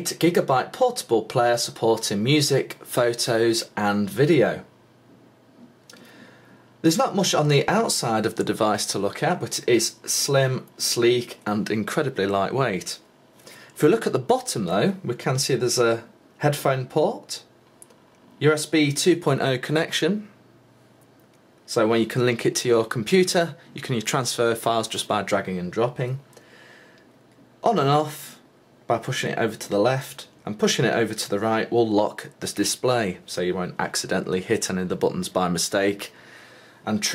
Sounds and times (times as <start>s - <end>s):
Speech: 0.0s - 4.7s, 6.8s - 13.1s, 13.8s - 17.5s, 18.4s - 20.4s, 21.7s - 26.3s, 27.6s - 36.2s, 36.8s - 37.1s.